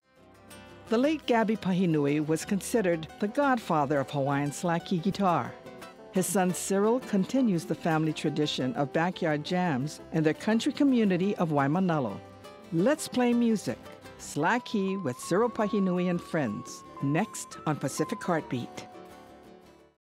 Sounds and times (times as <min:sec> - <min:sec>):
Music: 0:00.0 - 0:20.0
Speech: 0:00.9 - 0:05.6, 0:06.2 - 0:12.2, 0:12.8 - 0:18.9.